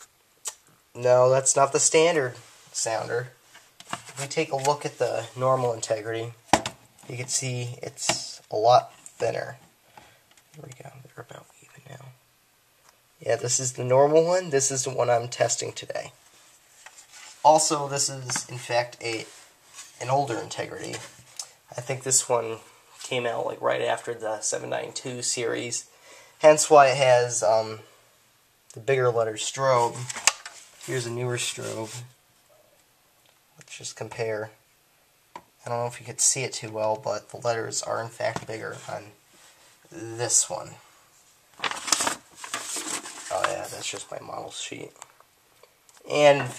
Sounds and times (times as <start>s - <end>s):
Speech: 0.5s - 3.4s, 4.1s - 6.4s, 7.0s - 9.6s, 10.5s - 12.2s, 13.2s - 16.2s, 17.4s - 19.4s, 20.0s - 27.9s, 28.7s - 30.2s, 30.8s - 32.2s, 33.6s - 34.6s, 35.6s - 39.2s, 39.9s - 40.9s, 43.3s - 45.0s, 46.0s - 46.5s.